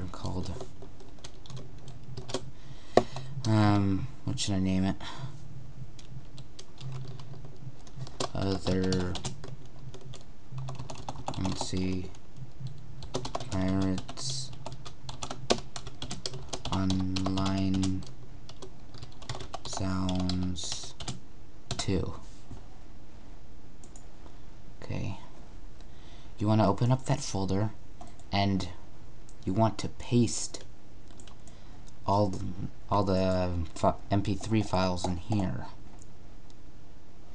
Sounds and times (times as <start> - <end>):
Speech: 0.0 - 0.7, 3.4 - 5.0, 8.3 - 9.3, 11.4 - 12.2, 13.5 - 14.6, 16.7 - 18.1, 19.7 - 21.0, 21.8 - 22.3, 24.8 - 25.4, 26.4 - 28.8, 29.4 - 30.7, 32.0 - 35.8
Computer keyboard: 0.4 - 3.6, 6.0 - 21.8, 31.1 - 31.5.